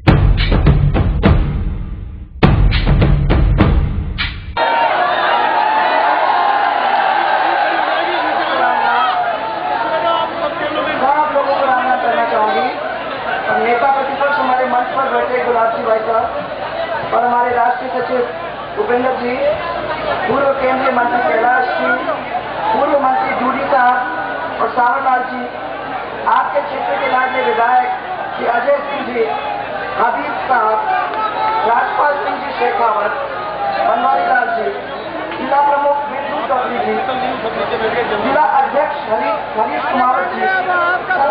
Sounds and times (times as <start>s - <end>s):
Female speech, woman speaking: 11.0s - 12.8s, 13.5s - 16.3s, 17.1s - 25.6s, 26.3s - 29.4s, 30.0s - 31.0s, 31.6s - 33.2s, 33.8s - 34.8s, 35.4s - 37.3s, 38.0s - 41.3s.